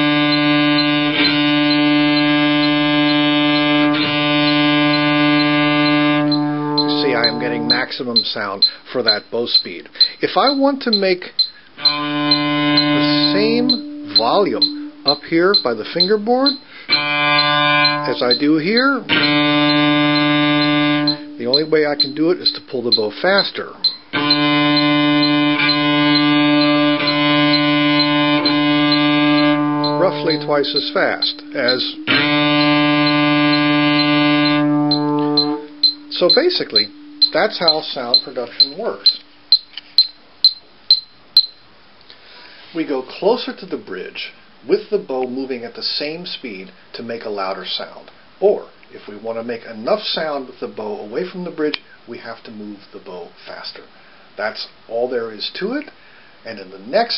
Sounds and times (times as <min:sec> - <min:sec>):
Cello: 0:00.0 - 0:08.0, 0:11.8 - 0:16.2, 0:16.9 - 0:23.5, 0:24.1 - 0:39.0
Inside, small room: 0:00.0 - 0:57.1
Speech: 0:06.9 - 0:11.4, 0:13.0 - 0:16.6, 0:18.0 - 0:19.1, 0:21.4 - 0:23.8, 0:30.0 - 0:32.1, 0:36.1 - 0:39.2, 0:42.7 - 0:57.1.